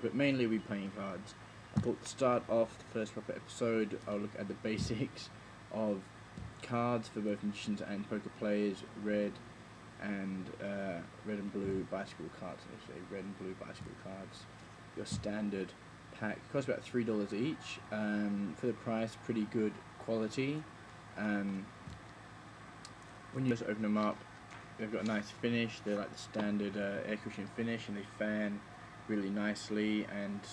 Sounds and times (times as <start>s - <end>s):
Speech: 0.0s - 9.4s, 10.0s - 21.7s, 23.4s - 24.2s, 24.8s - 30.5s.